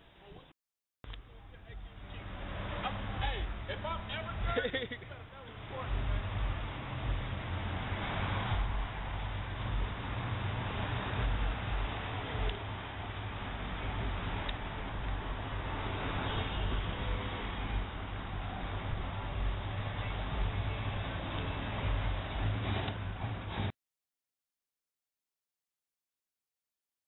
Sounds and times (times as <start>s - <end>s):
Car: 1.1s - 23.7s.